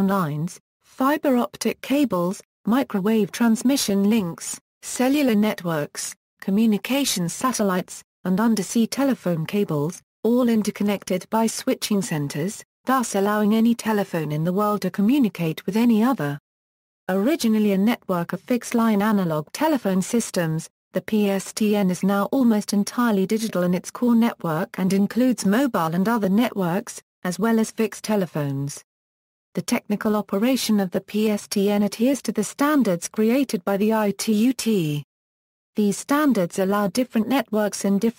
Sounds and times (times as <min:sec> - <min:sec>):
Speech: 0:00.0 - 0:16.4, 0:17.1 - 0:28.9, 0:29.6 - 0:35.1, 0:35.8 - 0:38.1.